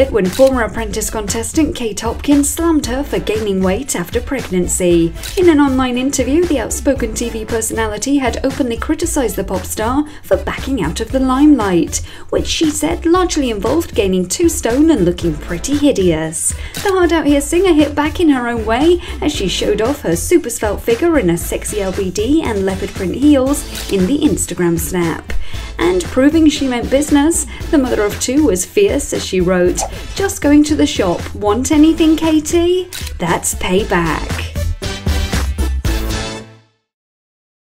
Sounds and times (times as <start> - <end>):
Speech: 0.0 - 34.6
Music: 0.0 - 37.0.